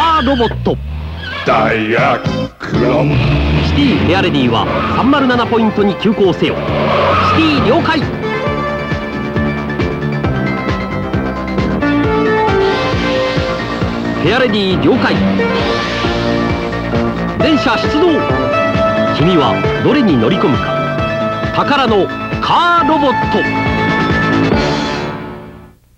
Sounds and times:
Speech: 0.0s - 0.8s, 1.4s - 6.6s, 7.2s - 8.1s, 14.2s - 15.2s, 17.4s - 18.3s, 19.1s - 20.7s, 21.5s - 23.5s
Music: 0.3s - 25.9s.

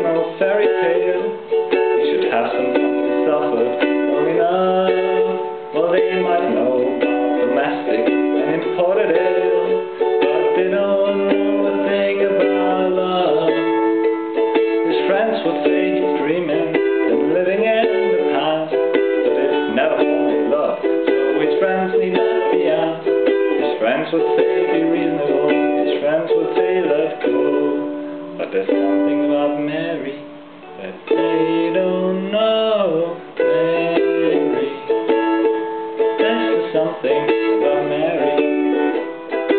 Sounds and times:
Banjo: 0.0s - 39.5s
Guitar: 0.0s - 39.5s
Ukulele: 0.0s - 39.5s.

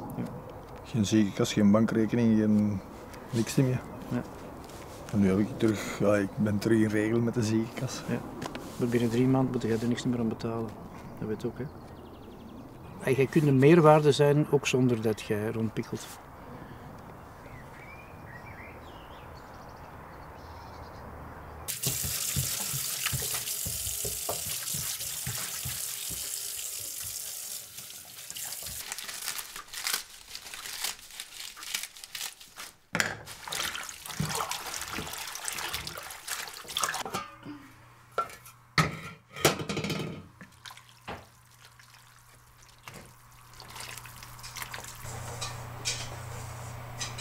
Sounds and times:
Water tap, faucet: 21.7s - 29.0s, 33.4s - 37.0s, 40.6s - 45.0s.

